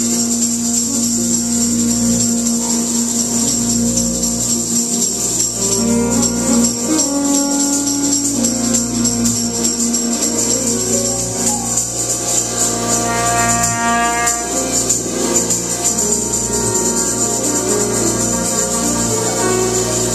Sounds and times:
Jazz: 0.0 - 20.1.

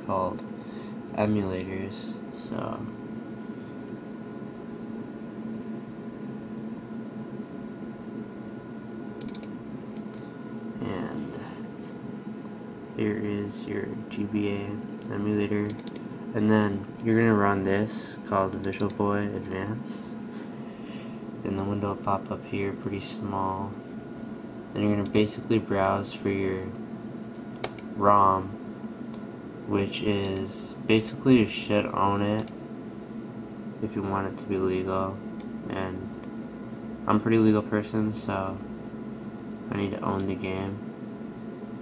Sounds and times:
Speech: 0.0 - 0.5, 1.1 - 3.0, 10.8 - 11.6, 13.0 - 20.2, 21.4 - 23.8, 24.8 - 26.8, 28.0 - 28.6, 29.7 - 32.5, 33.8 - 36.2, 37.1 - 38.7, 39.7 - 40.8.

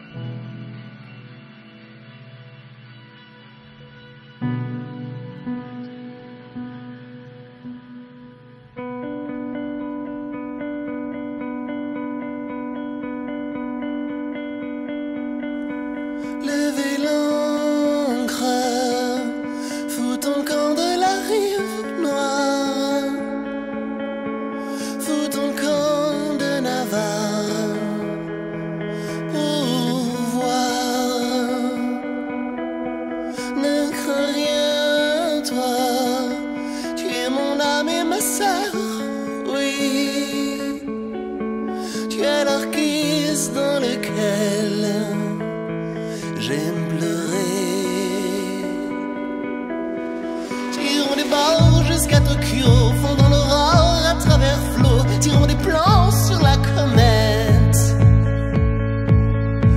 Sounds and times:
Music: 0.0 - 59.7.

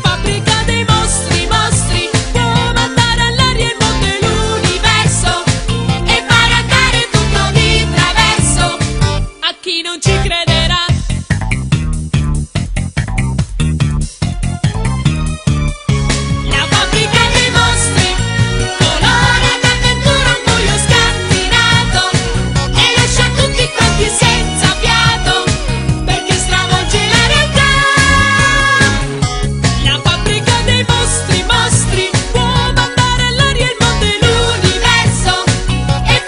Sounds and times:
Music: 0.0 - 36.2.

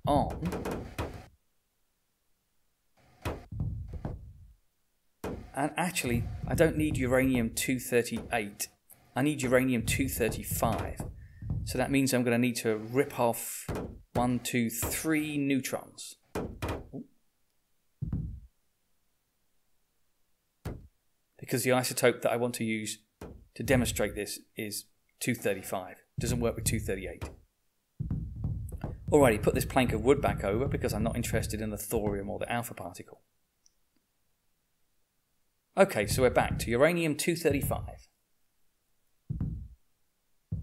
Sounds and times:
Speech: 0.0 - 0.5, 5.6 - 11.0, 11.7 - 16.2, 21.4 - 23.0, 23.6 - 27.3, 29.1 - 33.2, 35.8 - 38.1.

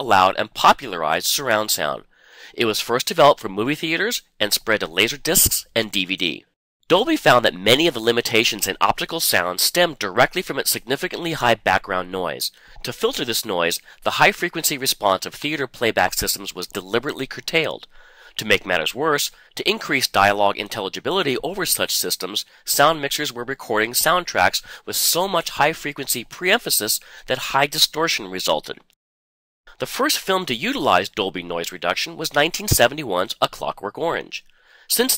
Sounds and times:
Speech: 0.0 - 28.9, 29.8 - 35.1.

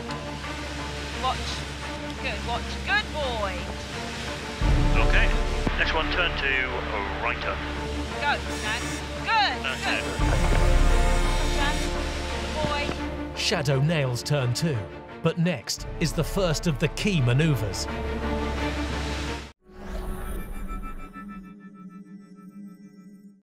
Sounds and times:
Music: 0.0 - 23.4
Speech: 5.0 - 7.6, 8.2 - 10.2, 12.6 - 17.9.

